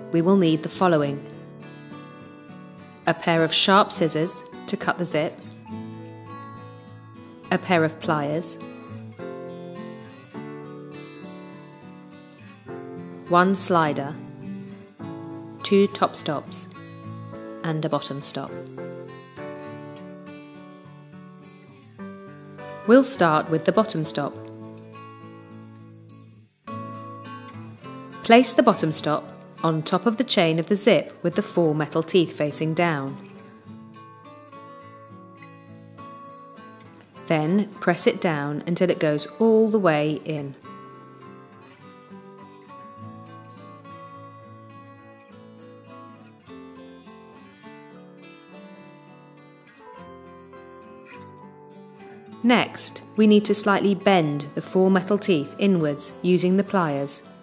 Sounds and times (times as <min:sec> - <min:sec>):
Music: 0:00.0 - 0:57.4
Speech: 0:00.1 - 0:01.3, 0:03.1 - 0:05.4, 0:07.5 - 0:08.6, 0:13.3 - 0:14.2, 0:15.6 - 0:16.7, 0:17.6 - 0:18.6, 0:22.9 - 0:24.4, 0:28.2 - 0:33.2, 0:37.3 - 0:40.6, 0:52.4 - 0:57.2.